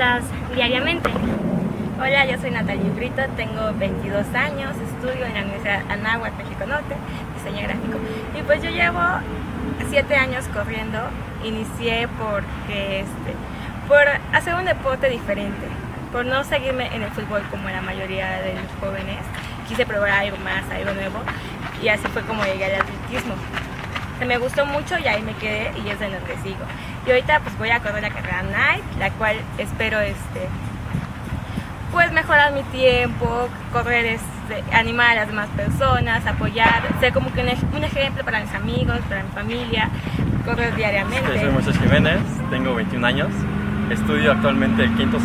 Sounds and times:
Speech: 0.0s - 1.2s, 2.0s - 9.2s, 9.8s - 23.5s, 24.2s - 30.5s, 31.9s - 43.3s, 43.9s - 45.2s.

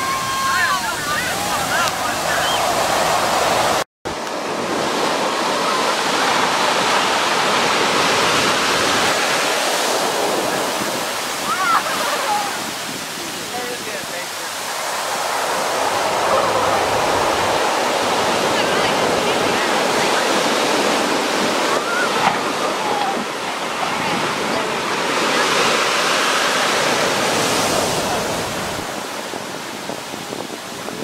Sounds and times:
Wind noise (microphone): 0.0s - 14.1s, 26.6s - 31.0s
Waves, surf: 0.0s - 31.0s.

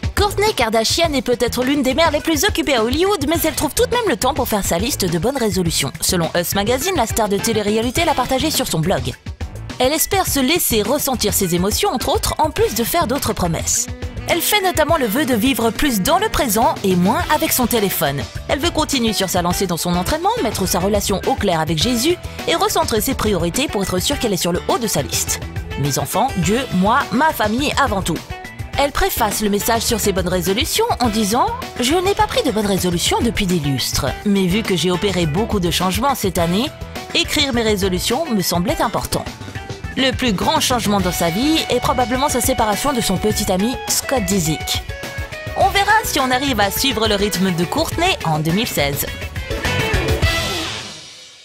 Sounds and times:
Music: 0.0s - 51.4s
Speech: 0.2s - 9.2s, 9.8s - 28.2s, 28.8s - 39.3s, 39.9s - 44.8s, 45.6s - 49.2s.

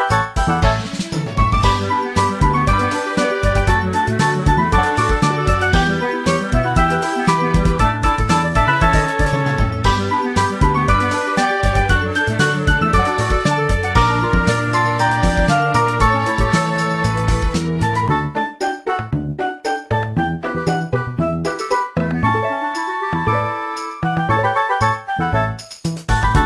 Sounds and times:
Music: 0.0s - 26.4s.

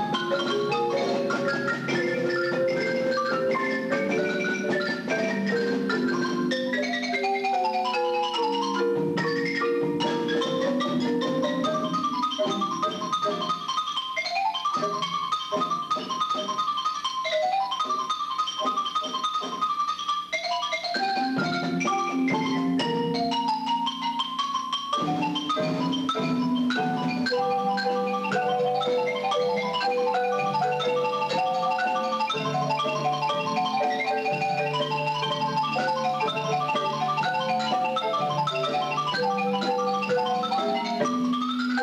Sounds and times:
Marimba, xylophone: 0.0s - 41.8s.

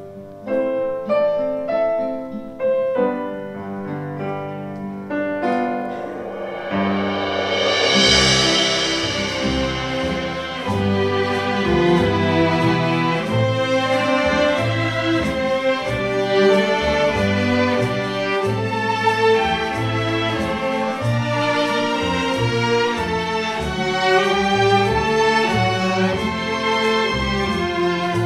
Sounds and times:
Orchestra: 0.0s - 28.2s.

